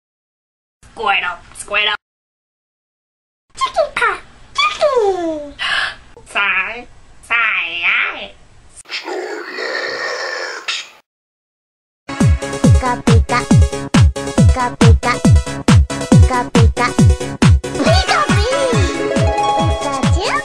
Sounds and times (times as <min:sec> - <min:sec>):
Music: 0:12.1 - 0:20.4.